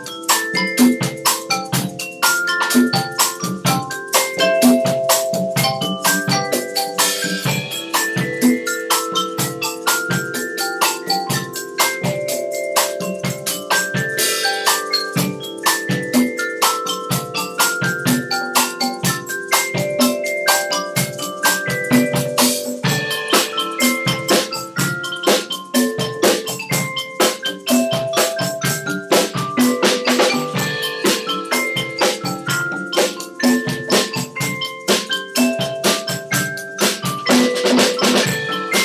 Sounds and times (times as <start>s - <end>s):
Percussion: 0.0s - 38.8s.